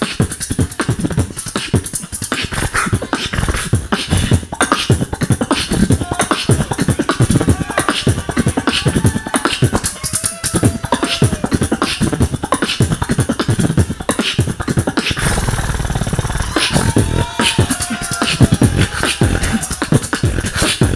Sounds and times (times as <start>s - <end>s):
Beatboxing: 0.0s - 20.9s.